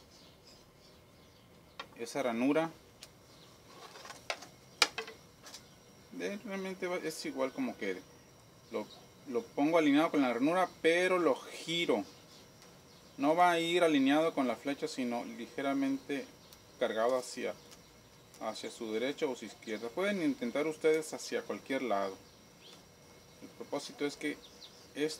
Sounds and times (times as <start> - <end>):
Speech: 2.0 - 2.8, 6.1 - 8.1, 8.7 - 12.1, 13.2 - 17.6, 18.4 - 22.2, 23.4 - 24.4, 25.0 - 25.1.